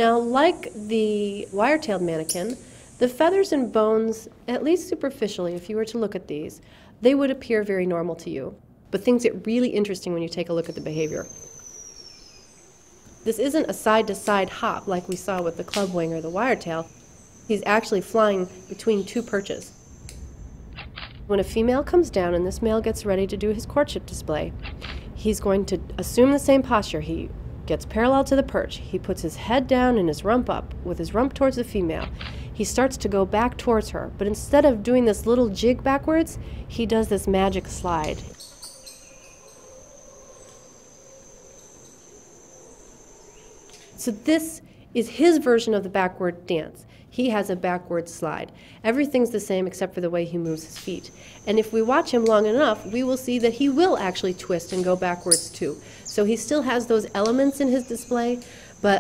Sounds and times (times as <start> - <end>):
Speech: 0.0 - 11.3, 13.3 - 16.9, 17.5 - 19.7, 21.3 - 24.5, 25.2 - 38.4, 44.0 - 59.0.